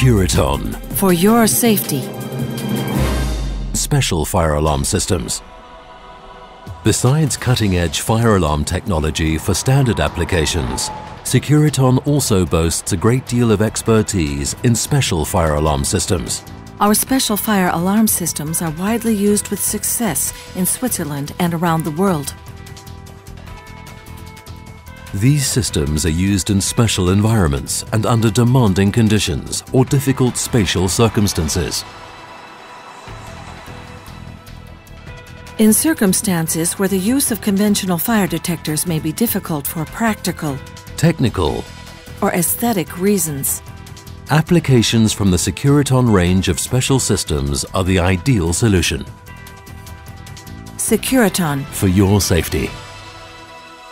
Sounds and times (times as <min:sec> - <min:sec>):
Speech: 0:00.0 - 0:02.1, 0:03.8 - 0:05.5, 0:06.9 - 0:22.4, 0:25.1 - 0:31.9, 0:35.6 - 0:43.6, 0:44.3 - 0:49.1, 0:50.8 - 0:52.8
Music: 0:00.0 - 0:53.9.